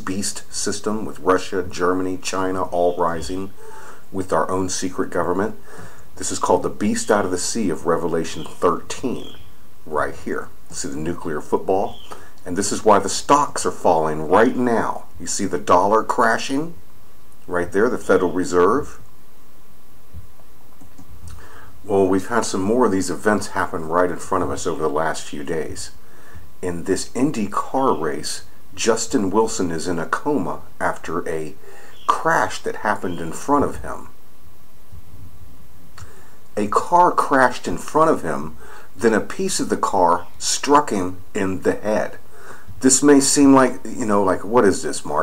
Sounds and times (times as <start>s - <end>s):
Speech: 0.0s - 5.6s, 6.2s - 16.8s, 17.5s - 19.0s, 21.9s - 26.0s, 26.6s - 34.2s, 36.6s - 42.2s, 42.8s - 45.2s.